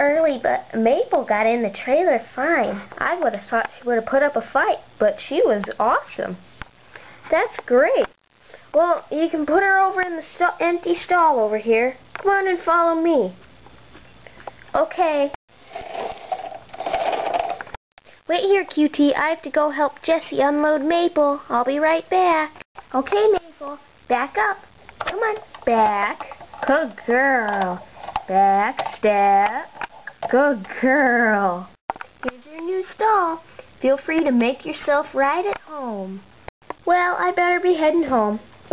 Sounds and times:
Speech: 0:00.0 - 0:06.4, 0:07.3 - 0:13.4, 0:14.8 - 0:15.4, 0:18.3 - 0:38.7.

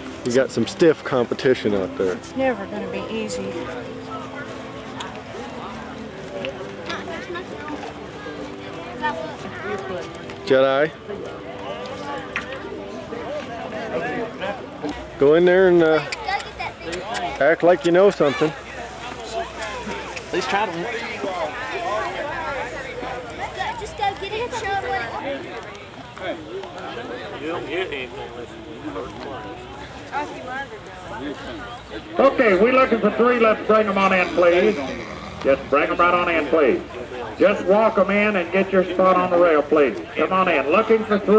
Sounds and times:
Clip-clop: 0:00.0 - 0:41.3.

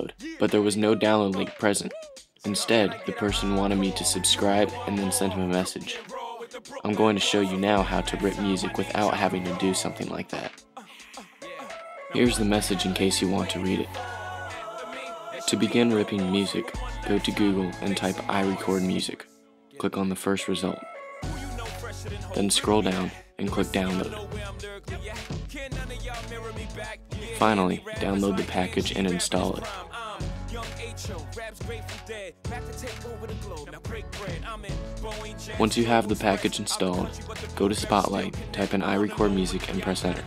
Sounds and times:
Speech: 0:00.0 - 0:06.0, 0:06.8 - 0:10.6, 0:12.2 - 0:14.0, 0:15.5 - 0:20.8, 0:22.2 - 0:24.4, 0:27.3 - 0:29.8, 0:35.6 - 0:40.2
Music: 0:00.0 - 0:40.2.

